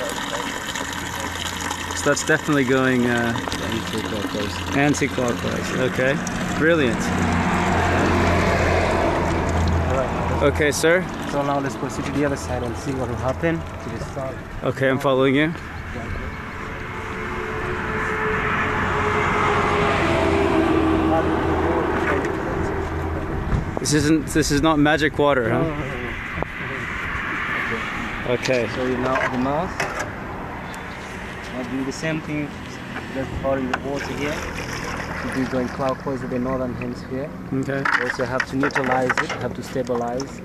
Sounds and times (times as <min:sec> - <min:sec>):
Water: 0:00.0 - 0:22.3, 0:23.8 - 0:40.4.